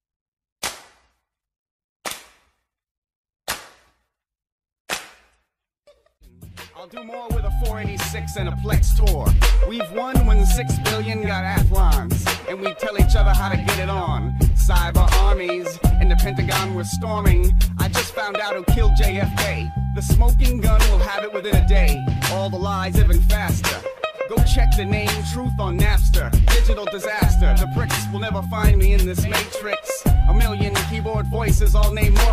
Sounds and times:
Music: 6.2s - 32.3s
Rapping: 6.6s - 32.3s.

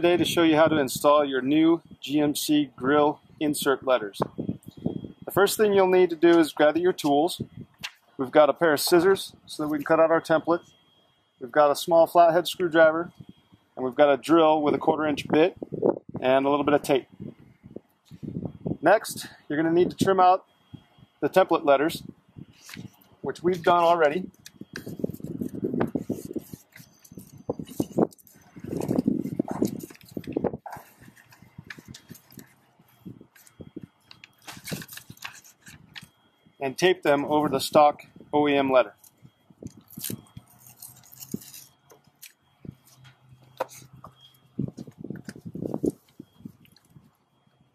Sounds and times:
Speech: 0.0s - 4.3s, 5.3s - 7.4s, 8.2s - 10.6s, 11.4s - 13.1s, 13.8s - 15.6s, 16.2s - 17.1s, 18.8s - 20.4s, 21.2s - 22.1s, 23.2s - 24.3s, 36.6s - 39.0s.

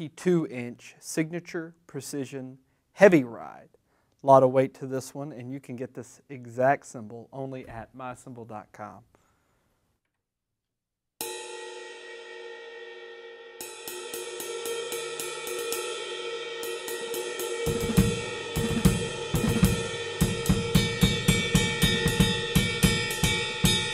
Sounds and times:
Speech: 0.0s - 9.1s
Snare drum: 17.6s - 23.9s.

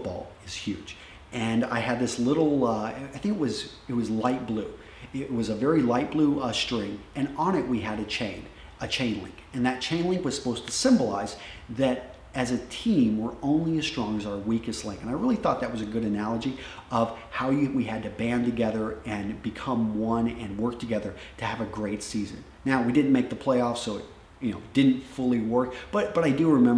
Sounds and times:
Inside, small room: 0.0s - 26.7s
Speech: 0.0s - 26.7s.

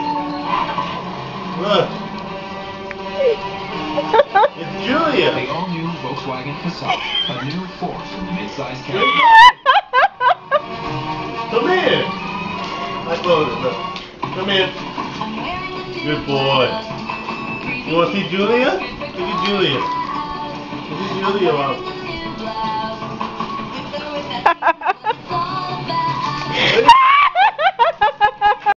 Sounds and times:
Music: 0.0s - 28.7s.

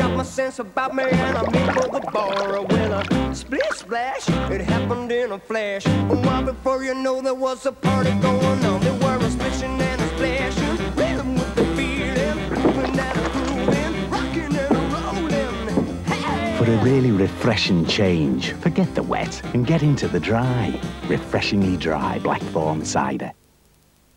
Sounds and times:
Music: 0.0s - 23.1s
Speech: 16.6s - 23.4s.

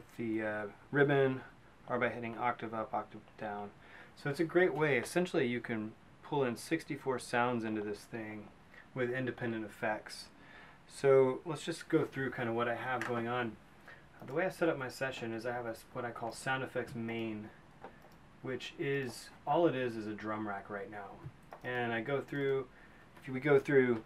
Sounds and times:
Speech: 0.0s - 13.6s, 14.2s - 17.6s, 18.4s - 24.0s.

